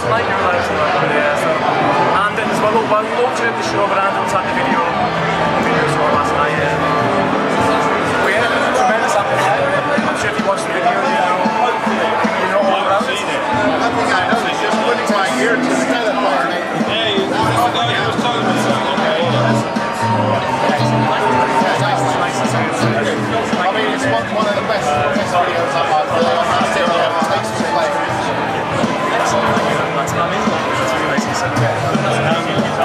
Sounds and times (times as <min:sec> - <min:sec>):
Speech: 0:00.0 - 0:32.8.